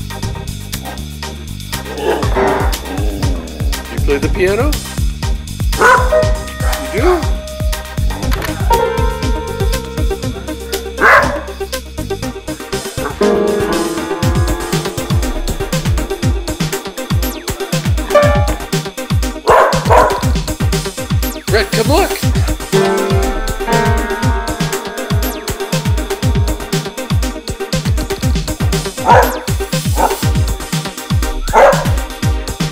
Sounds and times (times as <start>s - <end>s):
Music: 0.0s - 32.7s
Speech: 4.0s - 4.8s, 21.5s - 22.3s
Yip: 5.8s - 7.2s, 11.0s - 11.5s, 19.5s - 20.3s, 29.0s - 30.2s, 31.4s - 32.0s.